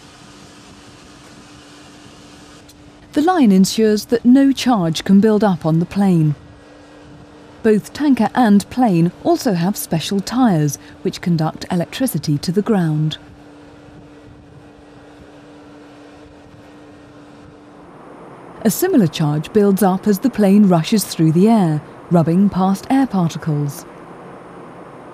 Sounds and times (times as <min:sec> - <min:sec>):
Speech: 0:03.2 - 0:06.4, 0:07.7 - 0:13.2, 0:18.6 - 0:23.8.